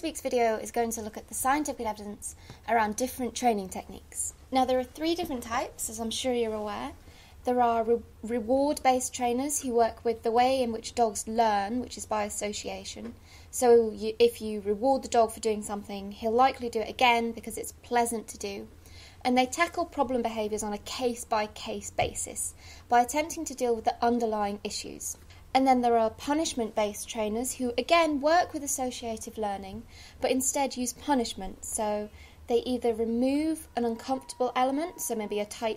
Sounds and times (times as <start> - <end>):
Speech: 0.0 - 35.7.